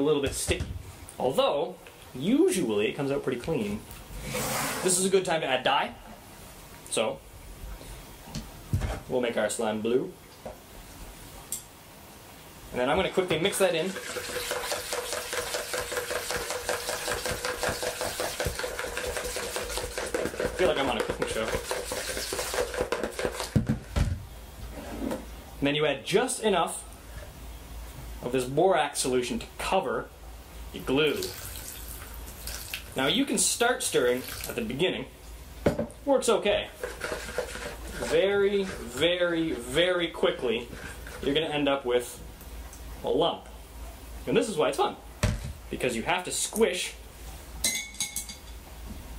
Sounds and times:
Stir: 13.2 - 23.7, 36.6 - 41.6.

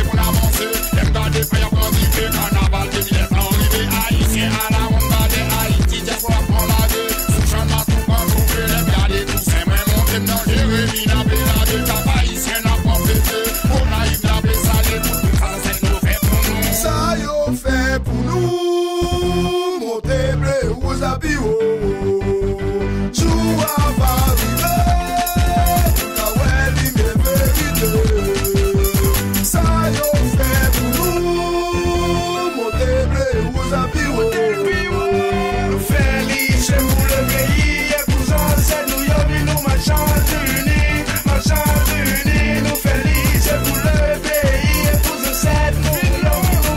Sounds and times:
Hip hop music: 0.0 - 46.7.

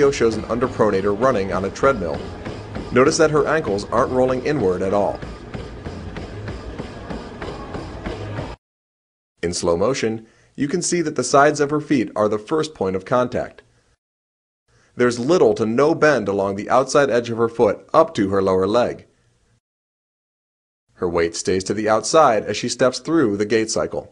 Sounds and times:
Speech: 0.0 - 2.3, 2.9 - 5.2, 9.4 - 13.6, 15.0 - 19.1, 21.0 - 24.1.

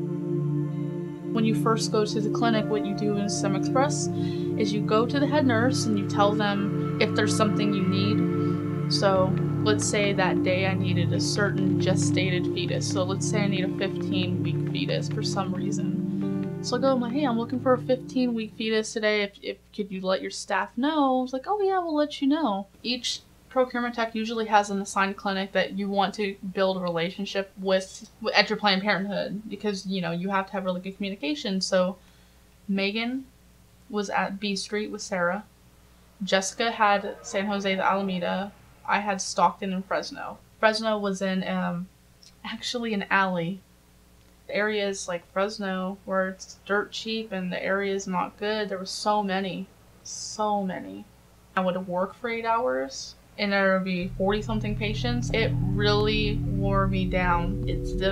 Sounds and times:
Music: 0.0 - 18.8, 54.0 - 58.1
Speech: 1.4 - 8.3, 8.9 - 16.0, 16.7 - 32.0, 32.7 - 33.3, 33.9 - 35.5, 36.2 - 43.6, 44.5 - 58.1.

